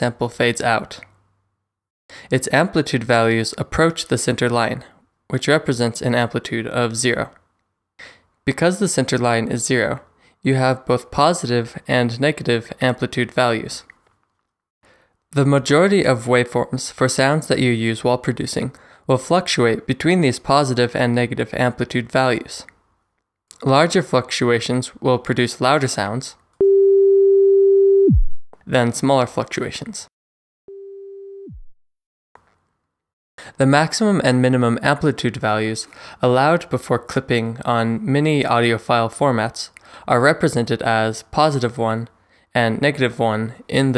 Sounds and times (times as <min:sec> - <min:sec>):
Speech: 0:00.0 - 0:01.1, 0:02.3 - 0:07.4, 0:08.5 - 0:13.9, 0:15.4 - 0:22.7, 0:23.5 - 0:26.4, 0:28.7 - 0:30.1, 0:33.5 - 0:43.9
Busy signal: 0:26.6 - 0:28.4, 0:30.7 - 0:31.6.